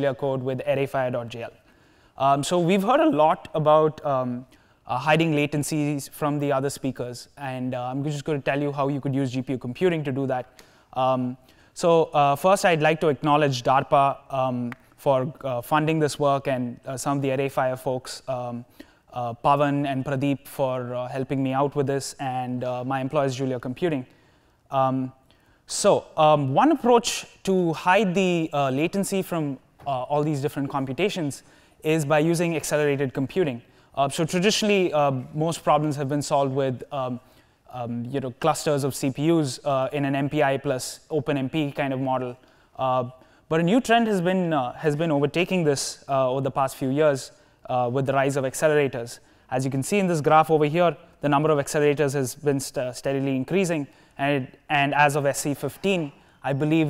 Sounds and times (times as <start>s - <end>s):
Speech: 0.0s - 1.6s, 2.2s - 24.1s, 24.7s - 56.9s.